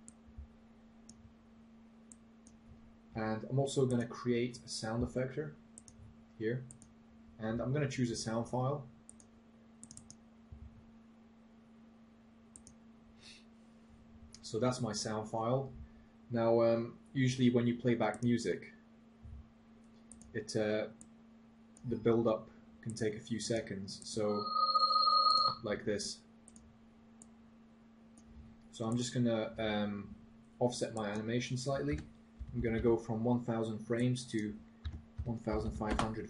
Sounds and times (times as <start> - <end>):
Speech: 3.2 - 5.6, 6.4 - 6.7, 7.4 - 8.9, 14.4 - 18.8, 20.4 - 21.0, 21.9 - 24.4, 25.6 - 26.2, 28.8 - 34.6, 35.3 - 36.2
Alarm: 24.1 - 25.6.